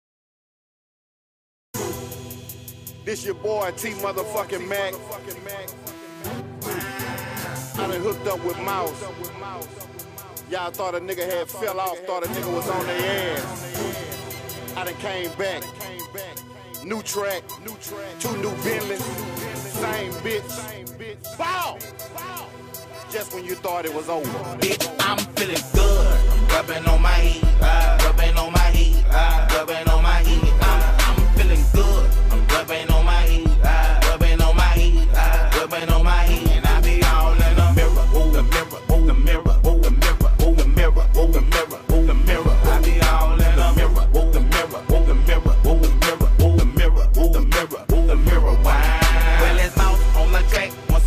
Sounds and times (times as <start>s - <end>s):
Music: 1.8s - 51.0s.